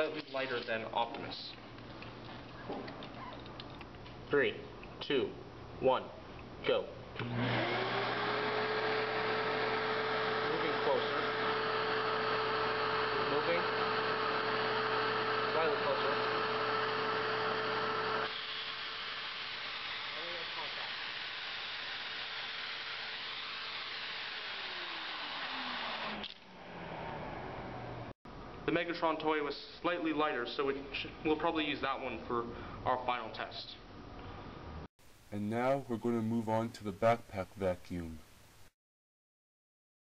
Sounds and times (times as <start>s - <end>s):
Speech: 0.0s - 1.6s, 4.3s - 7.0s, 10.5s - 11.3s, 13.2s - 13.7s, 15.5s - 16.2s, 20.2s - 20.9s, 28.7s - 33.8s, 35.4s - 38.2s.